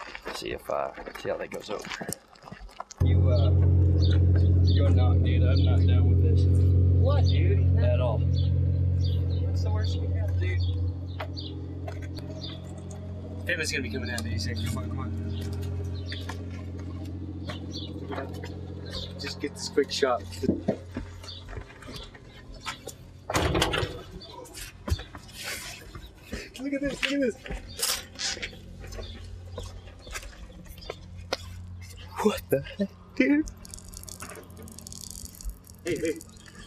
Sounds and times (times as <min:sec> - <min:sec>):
Outside, rural or natural: 0:00.0 - 0:36.6
Speech: 0:00.3 - 0:02.1, 0:03.0 - 0:03.6, 0:04.8 - 0:08.2, 0:09.4 - 0:10.6, 0:13.5 - 0:15.1, 0:19.2 - 0:20.6, 0:26.6 - 0:27.5, 0:32.1 - 0:33.5, 0:35.9 - 0:36.3.